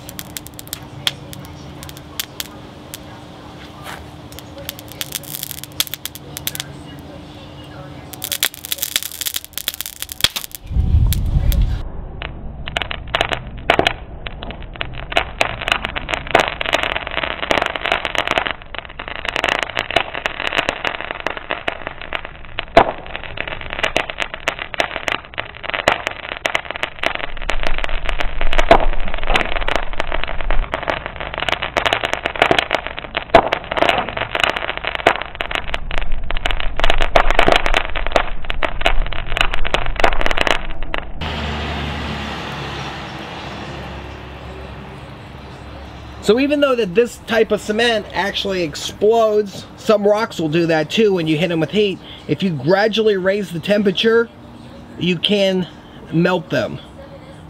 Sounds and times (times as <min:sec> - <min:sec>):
Firecracker: 0:00.0 - 0:57.5.